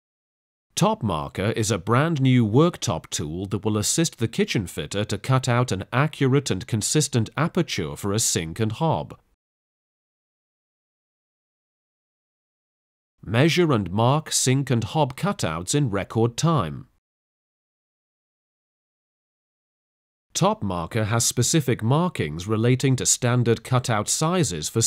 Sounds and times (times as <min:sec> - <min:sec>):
Speech: 0:00.8 - 0:09.3, 0:13.2 - 0:17.0, 0:20.4 - 0:24.8.